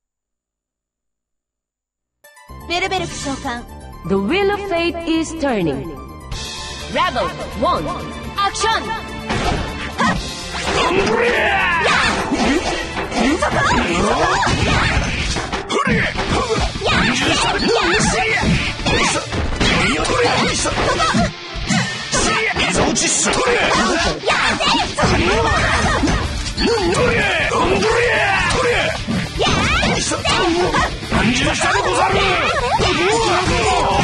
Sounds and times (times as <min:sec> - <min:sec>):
Music: 0:02.2 - 0:34.0.